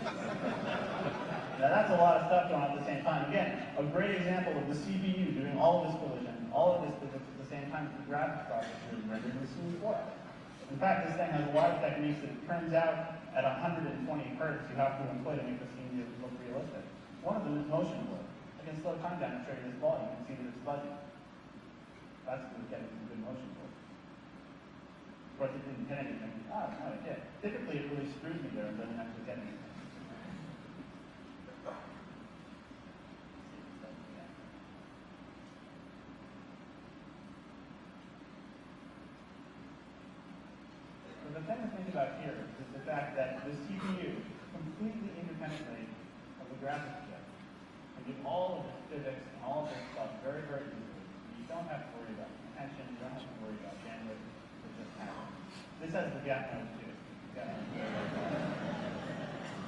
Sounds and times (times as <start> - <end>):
Speech: 1.5 - 21.2, 22.2 - 23.8, 25.4 - 30.6, 33.5 - 34.5, 41.0 - 47.4, 48.0 - 58.2.